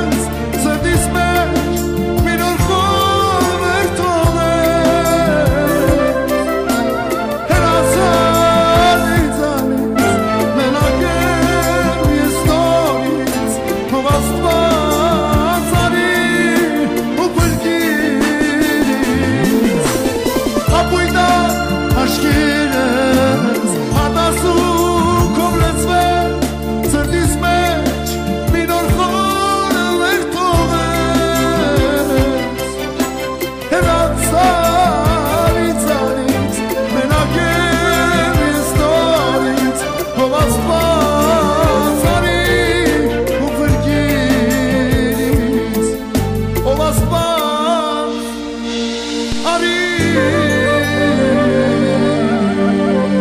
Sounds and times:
Clarinet: 0:05.2 - 0:13.0, 0:50.0 - 0:53.2.

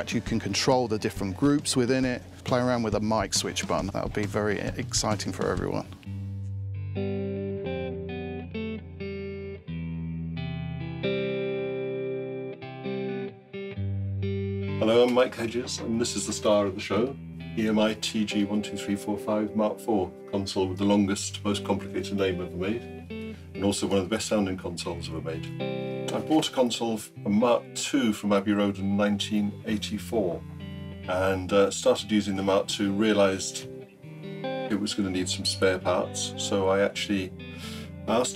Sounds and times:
Electric guitar: 0:05.3 - 0:38.3.

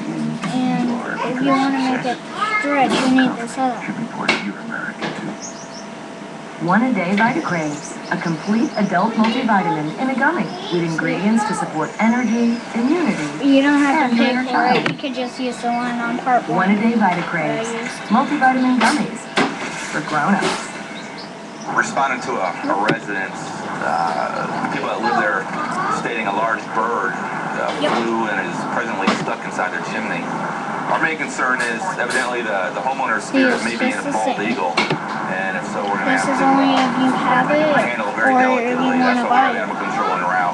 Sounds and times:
Speech: 0:00.0 - 0:05.4, 0:06.6 - 0:19.3, 0:20.0 - 0:20.6, 0:21.7 - 0:30.3, 0:30.9 - 0:40.5.

